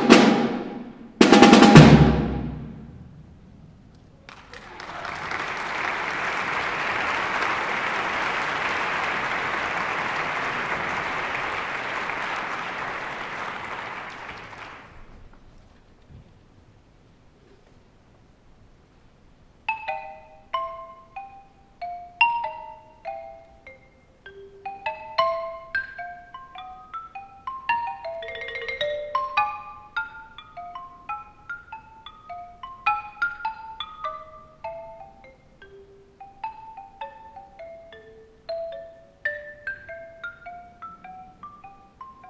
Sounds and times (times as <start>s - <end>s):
Snare drum: 0.0s - 3.0s
Drum kit: 0.0s - 3.7s.